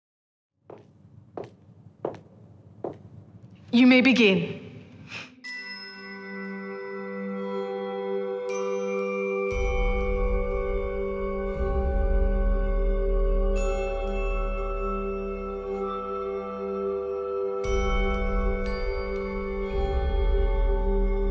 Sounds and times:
Glockenspiel: 5.4 - 21.3.

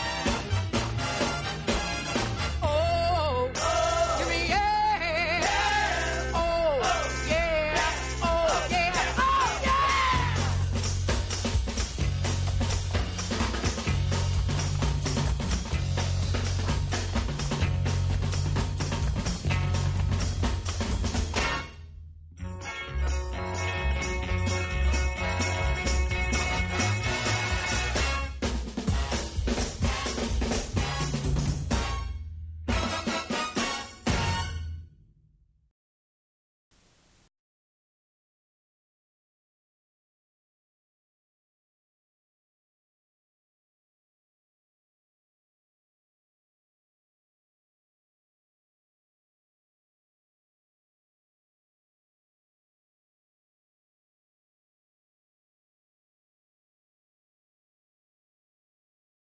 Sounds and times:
Music: 0.0 - 35.2.

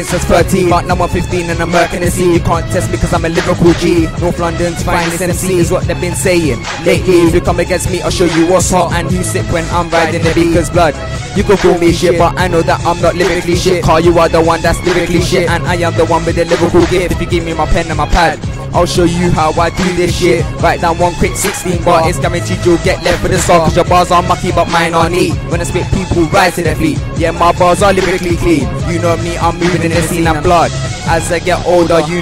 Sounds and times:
Rhythm and blues: 0.0 - 32.2.

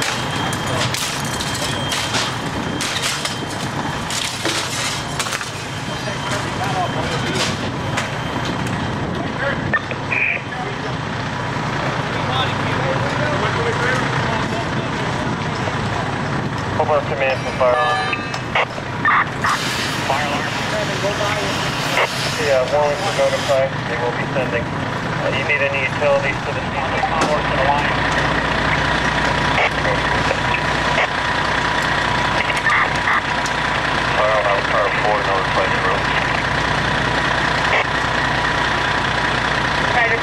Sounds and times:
Fire alarm: 0.0 - 8.6, 17.3 - 19.6
Speech: 5.9 - 7.6, 12.0 - 16.0, 16.8 - 18.1, 20.0 - 28.0, 29.6 - 30.6, 34.1 - 36.4, 39.9 - 40.2.

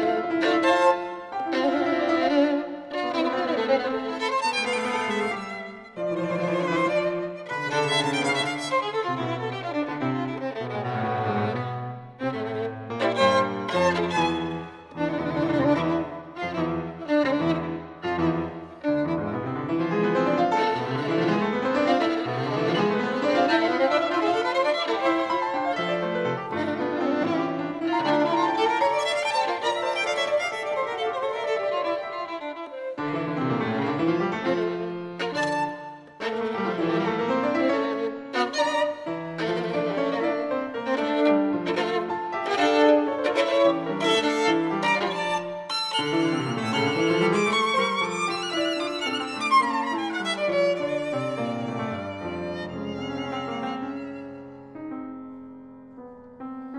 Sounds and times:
Violin, fiddle: 0.0 - 55.0.

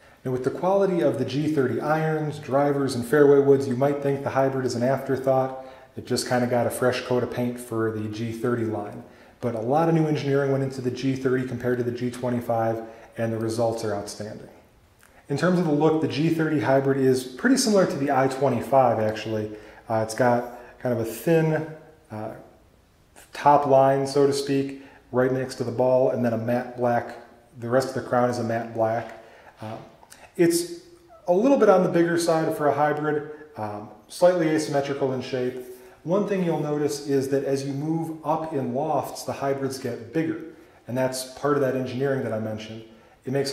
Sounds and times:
Speech: 0.0 - 22.6, 23.2 - 43.5.

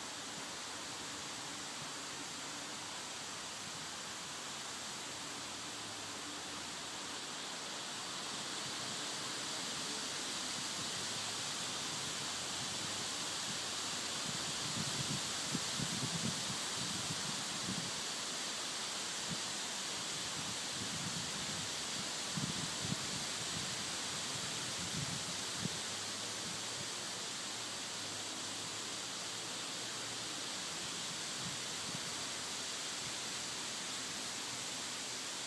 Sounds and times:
Rustling leaves: 0.0 - 35.4.

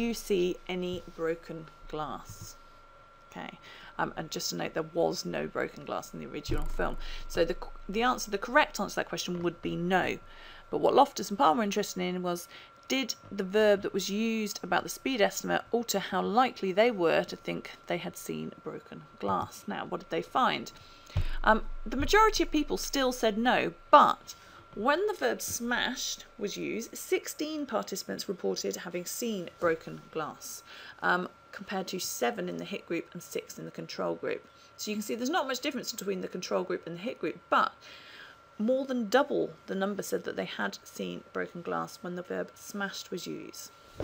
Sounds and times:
Narration, monologue: 0.0 - 44.0.

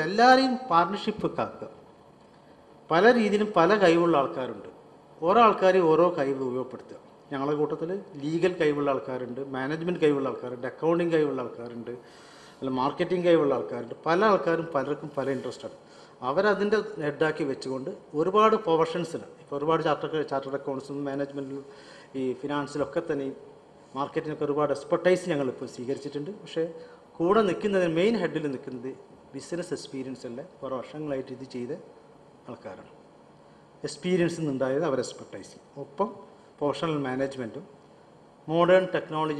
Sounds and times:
Male speech, man speaking: 0.0 - 1.8, 2.9 - 12.0, 12.6 - 23.4, 24.0 - 31.9, 32.5 - 33.0, 33.8 - 37.7, 38.5 - 39.3
Narration, monologue: 0.0 - 39.3.

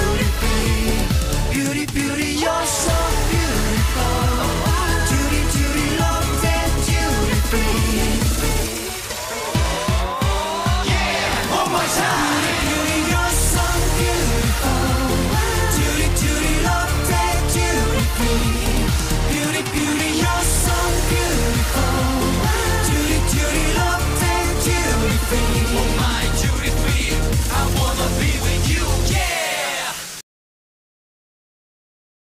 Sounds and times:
Music: 0.0 - 30.2.

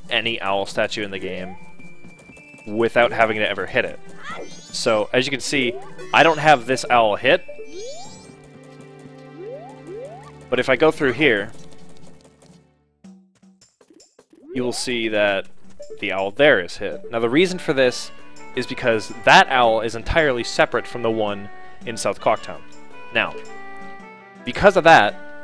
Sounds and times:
Music: 0.0 - 25.4
Speech: 0.1 - 1.6, 2.7 - 7.4, 10.6 - 11.5, 14.6 - 15.4, 16.0 - 22.6, 23.2 - 23.4, 24.5 - 25.2.

